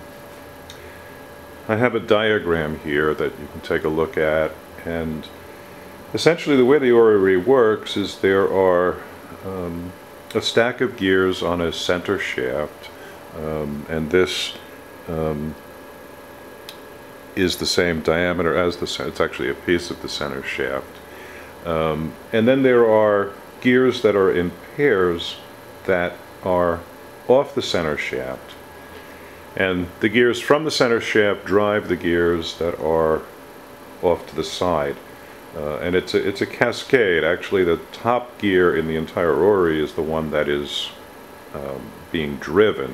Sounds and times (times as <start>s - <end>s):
Speech: 1.7s - 5.4s, 6.1s - 15.6s, 17.4s - 21.0s, 21.6s - 28.6s, 29.6s - 33.3s, 34.0s - 42.9s.